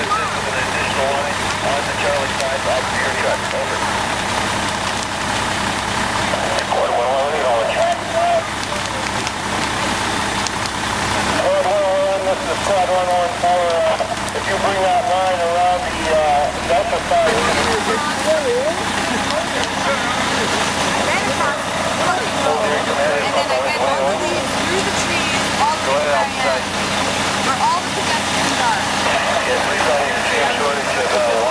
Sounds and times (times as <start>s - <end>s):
Speech: 0.0s - 4.0s, 6.3s - 10.2s, 11.2s - 31.5s
Crackle: 0.0s - 31.5s.